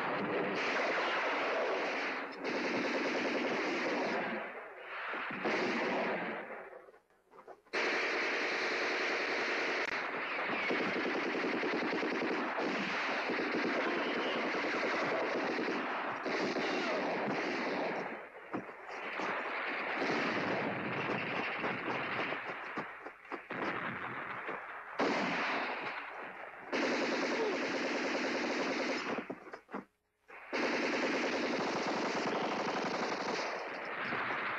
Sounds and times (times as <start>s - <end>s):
Machine gun: 0.0s - 6.8s, 7.8s - 29.8s, 30.4s - 34.5s.